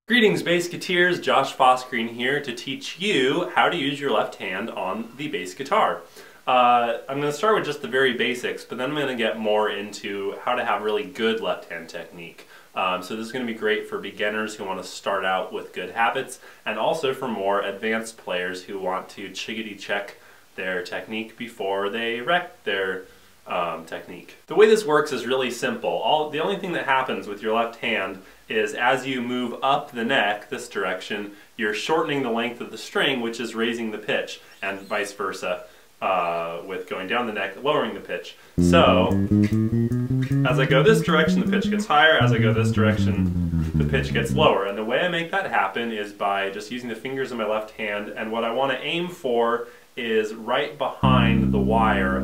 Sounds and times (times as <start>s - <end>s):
Speech: 0.1s - 39.3s, 40.2s - 52.2s.